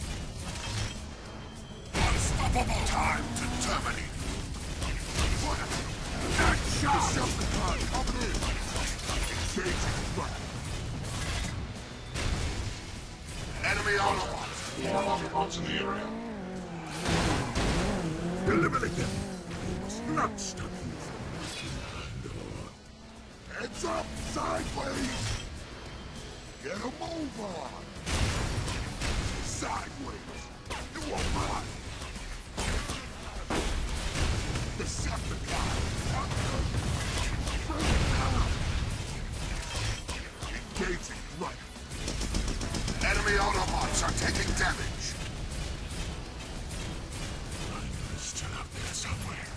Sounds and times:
Music: 0:10.6 - 0:16.0.

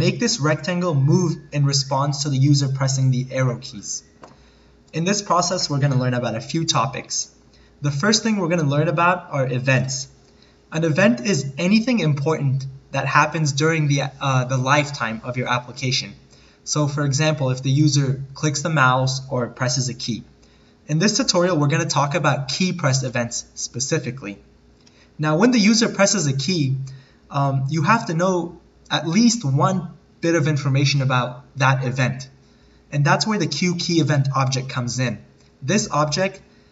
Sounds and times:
Speech: 0:00.0 - 0:04.1, 0:04.9 - 0:20.3, 0:20.9 - 0:24.5, 0:25.2 - 0:36.4.

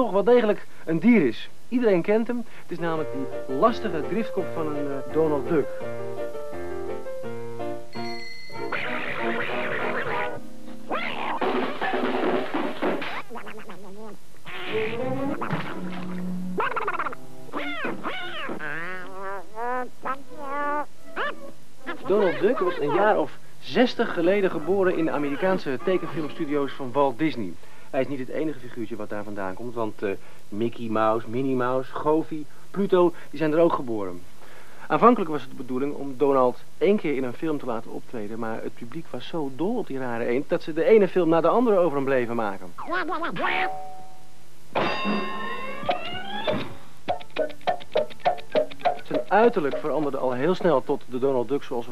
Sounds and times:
Speech: 0:00.0 - 0:05.7, 0:22.0 - 0:34.2, 0:34.9 - 0:43.4, 0:49.1 - 0:51.9
Music: 0:02.8 - 0:13.0, 0:14.7 - 0:18.1, 0:45.1 - 0:50.4.

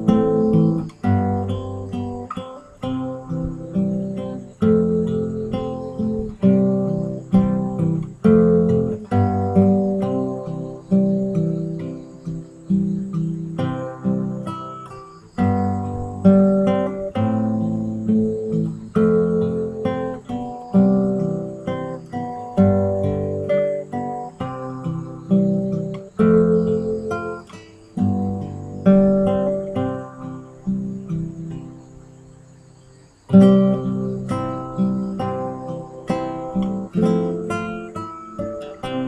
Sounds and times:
Guitar: 0:00.0 - 0:39.0.

